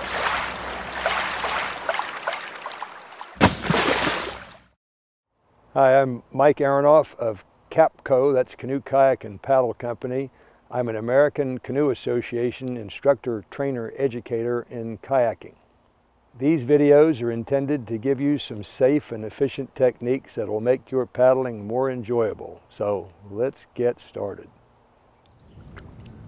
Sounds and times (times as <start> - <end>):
Cricket: 5.3 - 26.2.